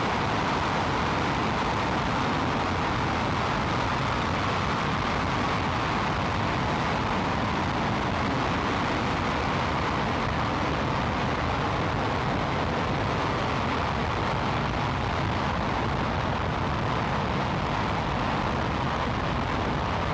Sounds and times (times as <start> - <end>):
Outside, rural or natural: 0.0 - 20.1.